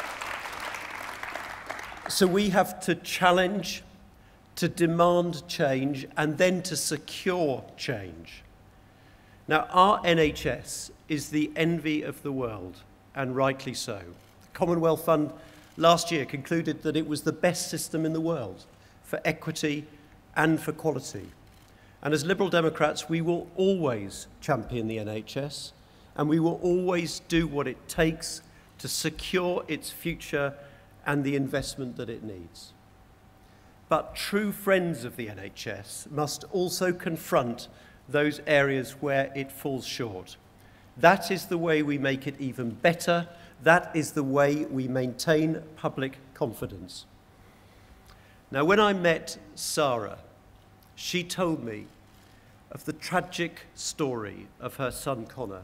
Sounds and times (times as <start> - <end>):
Male speech, man speaking: 2.1 - 3.9, 4.6 - 8.4, 9.5 - 21.4, 22.0 - 32.8, 33.9 - 40.4, 41.0 - 47.1, 48.5 - 50.3, 51.0 - 51.9, 52.7 - 55.6.